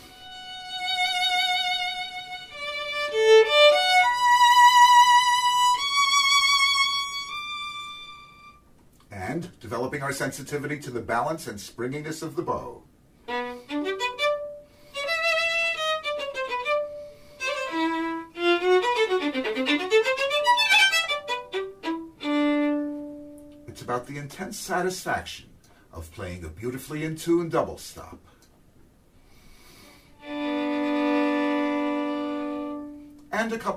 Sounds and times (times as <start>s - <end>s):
Violin, fiddle: 0.0s - 8.6s, 13.3s - 23.8s, 30.2s - 33.7s
Speech: 9.1s - 12.9s, 23.7s - 28.2s, 33.3s - 33.7s.